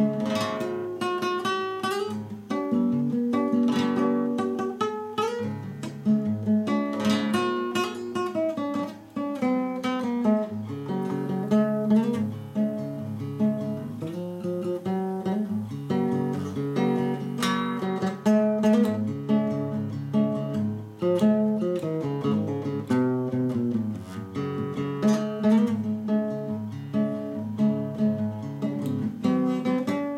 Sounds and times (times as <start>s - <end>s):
Acoustic guitar: 0.0s - 30.1s.